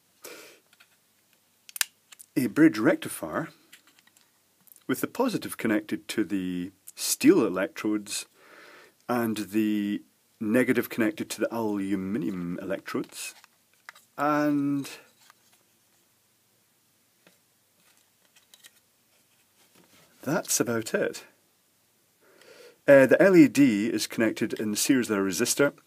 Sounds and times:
Inside, small room: 0.0s - 25.8s
Speech: 2.4s - 3.6s, 4.9s - 8.3s, 9.1s - 13.4s, 14.2s - 15.1s, 20.2s - 21.4s, 22.9s - 25.8s.

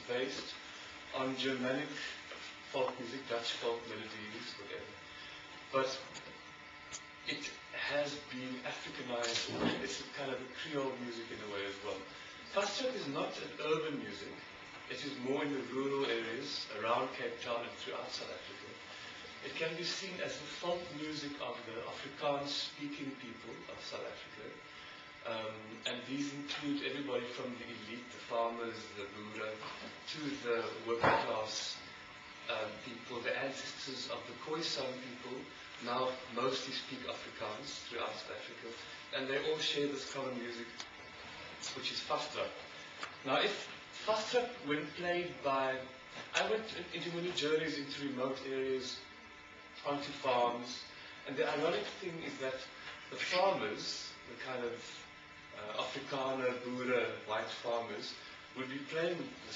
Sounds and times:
Speech: 0.0s - 5.0s, 5.7s - 6.3s, 7.2s - 40.9s, 41.6s - 49.1s, 49.8s - 59.5s.

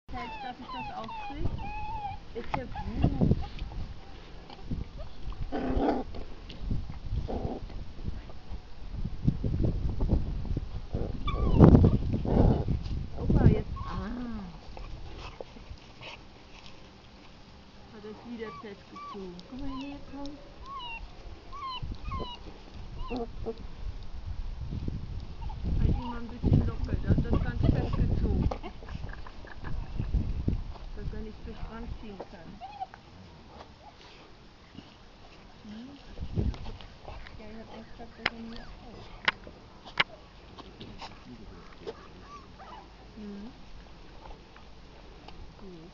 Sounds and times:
Dog: 0.2s - 5.3s, 11.2s - 12.7s, 18.2s - 23.6s, 38.5s - 42.9s.

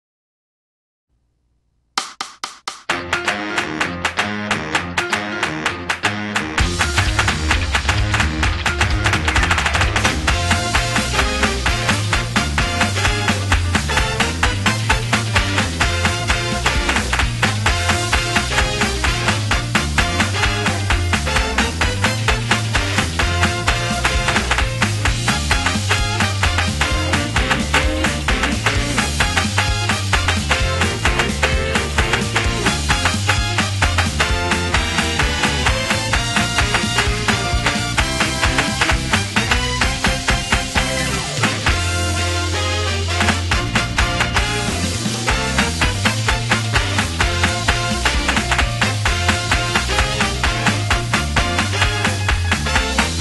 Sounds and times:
Music: 2.0s - 53.2s.

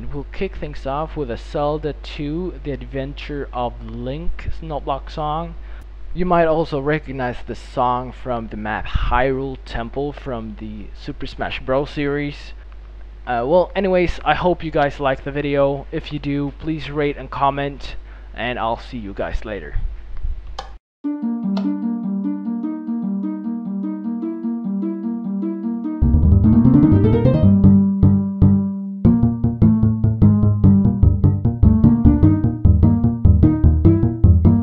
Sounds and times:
Speech: 0.0s - 5.6s, 6.2s - 12.6s, 13.3s - 19.9s.

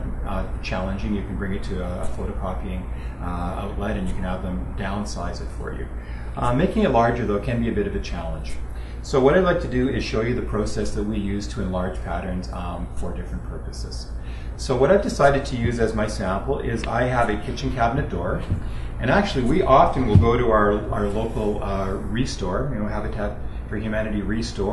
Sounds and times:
Speech: 0.0s - 24.7s.

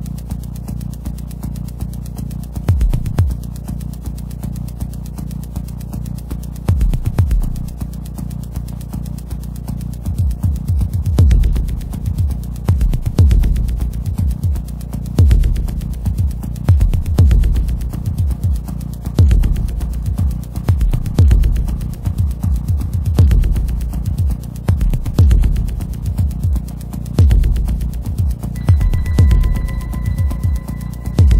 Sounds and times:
Music: 0.0s - 31.3s.

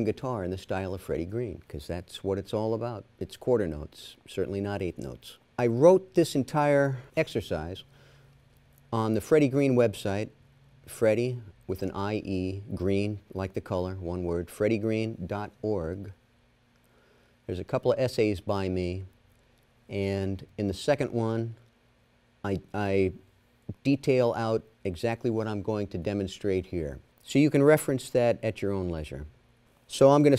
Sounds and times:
Speech: 0.0s - 7.9s, 8.9s - 16.2s, 17.5s - 19.2s, 19.9s - 21.6s, 22.4s - 30.3s.

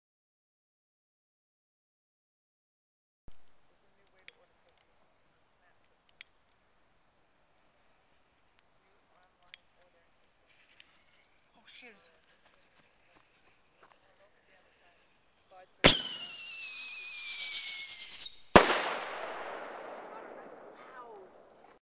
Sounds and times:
Speech: 3.7s - 6.0s, 20.0s - 21.5s.

